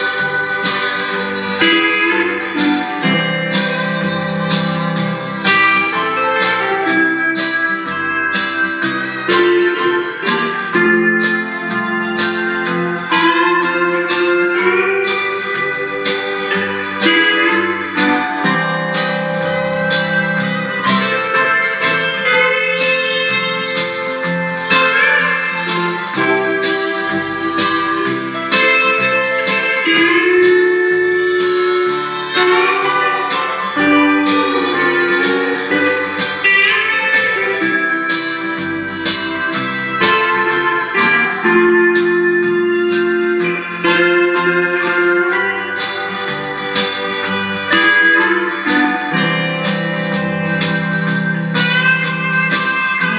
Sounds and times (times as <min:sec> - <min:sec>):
Strum: 0:00.0 - 0:53.1.